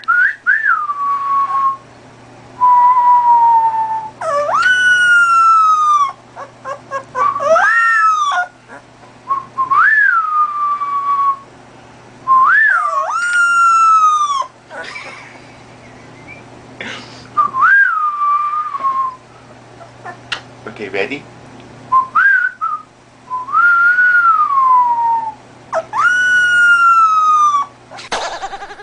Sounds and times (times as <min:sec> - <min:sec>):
Whistling: 0:00.0 - 0:01.8, 0:02.6 - 0:05.4, 0:07.2 - 0:08.2, 0:09.3 - 0:11.5, 0:12.3 - 0:14.2, 0:16.1 - 0:16.5, 0:17.4 - 0:19.2, 0:21.9 - 0:25.4.